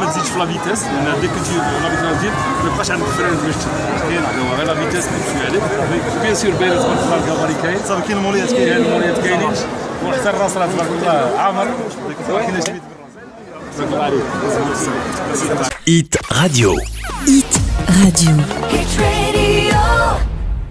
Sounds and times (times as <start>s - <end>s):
Music: 0.8s - 6.6s, 16.2s - 20.7s
Speech: 13.9s - 18.6s.